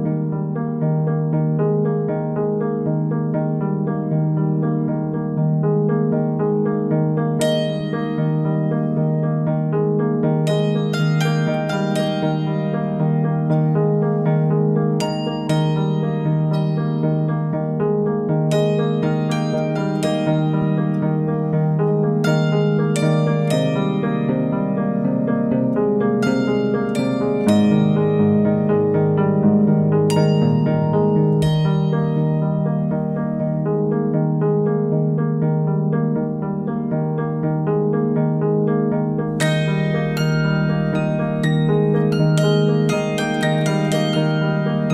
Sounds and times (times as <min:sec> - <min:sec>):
Harp: 0:00.0 - 0:37.8, 0:39.1 - 0:44.9.